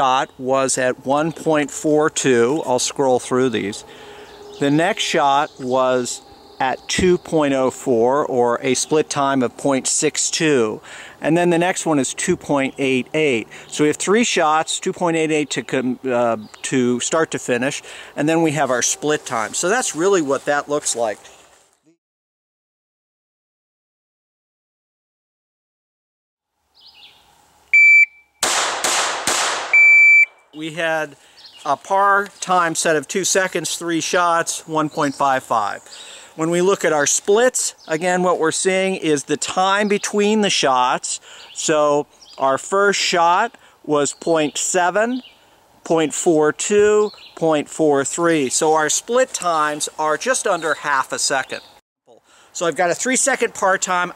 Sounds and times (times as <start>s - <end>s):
Speech: 0.0s - 3.8s, 4.6s - 21.3s, 30.6s - 45.2s, 45.8s - 54.1s
Outside, rural or natural: 0.0s - 22.0s, 26.4s - 54.1s.